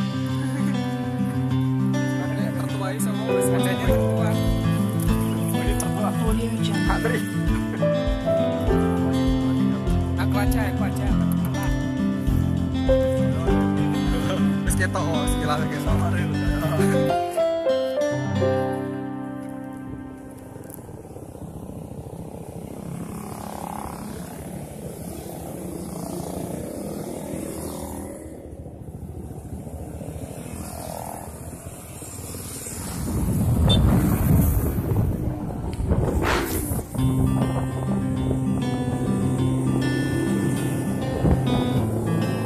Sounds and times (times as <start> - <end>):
Motorcycle: 0.0 - 42.4.